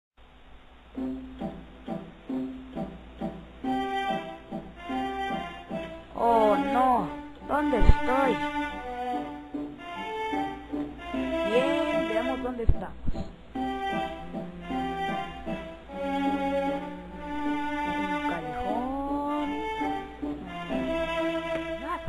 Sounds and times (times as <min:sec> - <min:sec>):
Music: 0:00.8 - 0:22.0
Speech: 0:06.2 - 0:08.4, 0:11.5 - 0:13.0, 0:18.3 - 0:19.7, 0:21.8 - 0:22.0.